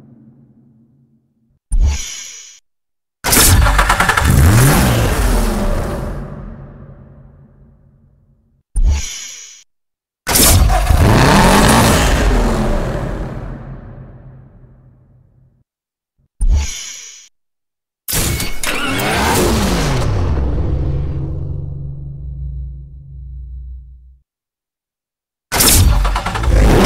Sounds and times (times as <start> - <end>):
Car: 3.4 - 7.1, 10.3 - 14.9, 18.6 - 24.2, 25.6 - 26.8
Accelerating, revving, vroom: 3.8 - 6.2, 10.6 - 13.6, 18.7 - 21.1, 26.2 - 26.8.